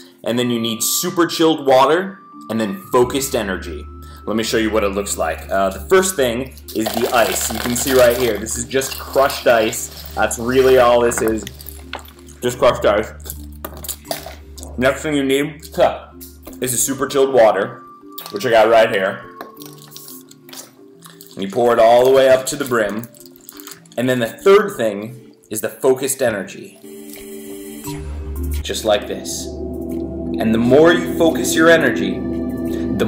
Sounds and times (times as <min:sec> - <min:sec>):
Music: 0:00.0 - 0:33.0
Speech: 0:00.2 - 0:11.6, 0:12.4 - 0:13.2, 0:14.7 - 0:19.2, 0:21.4 - 0:23.1, 0:24.0 - 0:26.8, 0:28.6 - 0:29.6, 0:30.4 - 0:32.3.